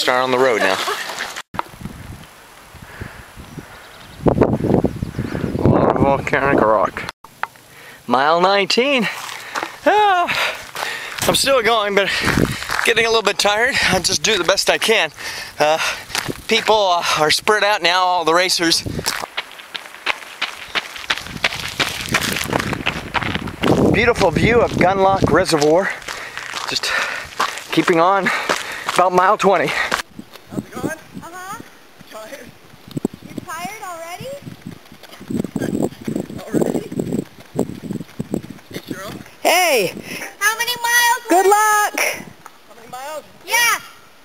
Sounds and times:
Run: 0:00.6 - 0:01.7, 0:09.0 - 0:13.1, 0:13.7 - 0:17.3, 0:18.6 - 0:30.5, 0:31.6 - 0:40.4
Walk, footsteps: 0:09.1 - 0:09.8, 0:19.0 - 0:29.0.

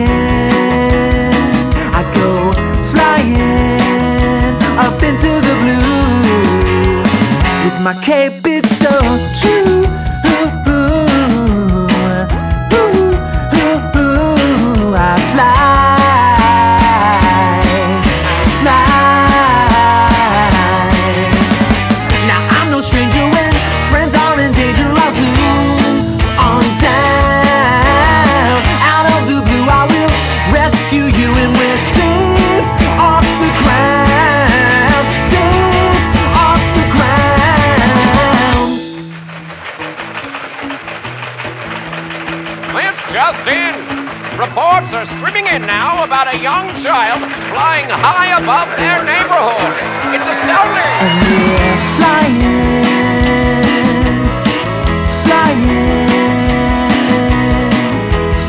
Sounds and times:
Music: 0:00.0 - 0:58.4.

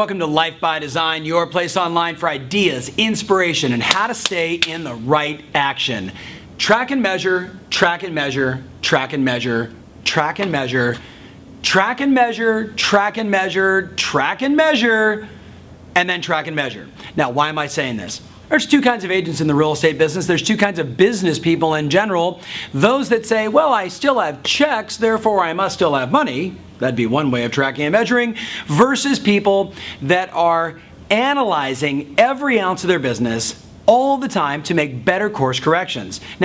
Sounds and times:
Speech: 0:00.0 - 0:11.0, 0:11.6 - 0:15.4, 0:16.0 - 0:36.4.

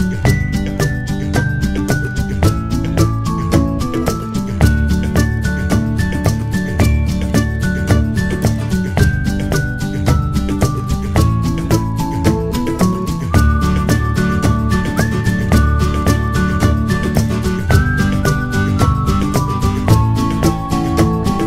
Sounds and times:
Music: 0:00.0 - 0:21.4.

